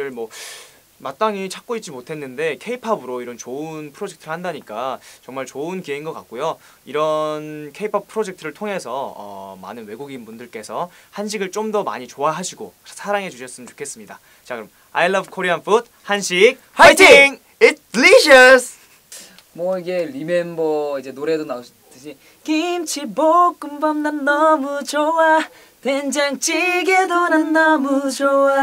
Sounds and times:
Speech: 0.0s - 0.3s, 1.0s - 18.8s, 19.6s - 22.2s.

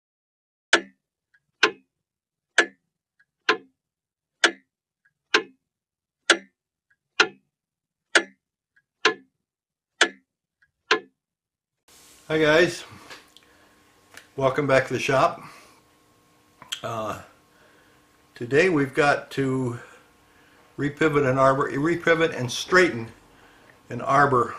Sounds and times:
Clock: 0.7s - 1.8s, 2.5s - 3.7s, 4.4s - 5.6s, 6.2s - 6.6s, 7.2s - 7.5s, 8.1s - 9.3s, 10.0s - 10.3s, 10.9s - 11.1s.

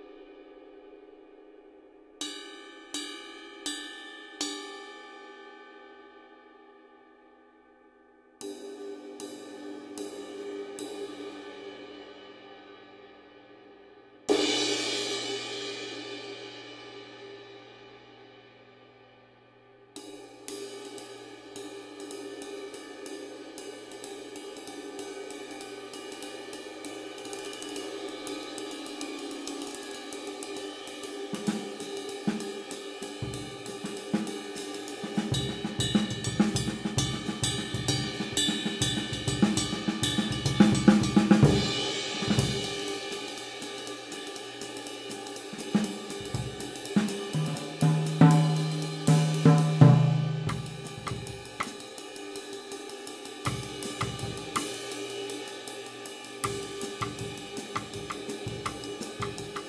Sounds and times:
Cymbal: 0.0s - 59.6s.

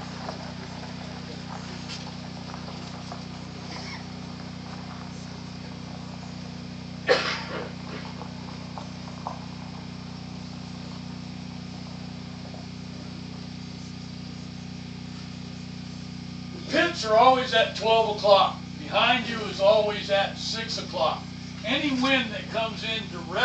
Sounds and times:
Speech: 16.6s - 23.4s.

